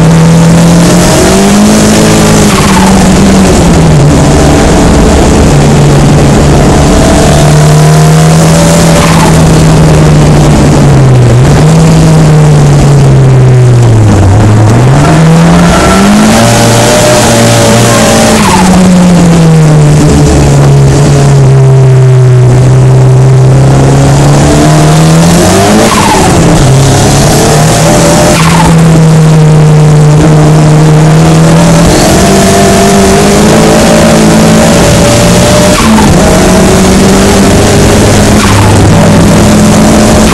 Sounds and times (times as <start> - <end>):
Skidding: 0.0 - 21.8, 23.5 - 40.3
Race car, auto racing: 0.0 - 40.3.